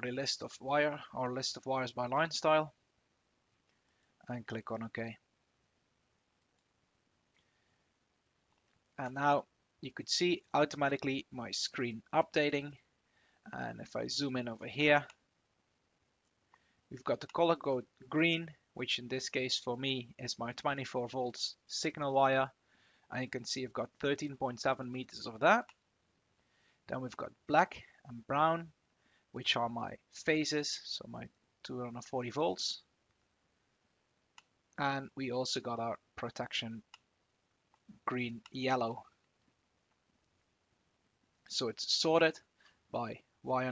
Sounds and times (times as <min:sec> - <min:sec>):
Speech: 0:00.0 - 0:02.8, 0:04.2 - 0:05.3, 0:09.0 - 0:12.8, 0:13.5 - 0:15.2, 0:16.9 - 0:25.8, 0:26.9 - 0:28.8, 0:29.4 - 0:32.9, 0:34.8 - 0:36.9, 0:38.0 - 0:39.1, 0:41.5 - 0:43.7.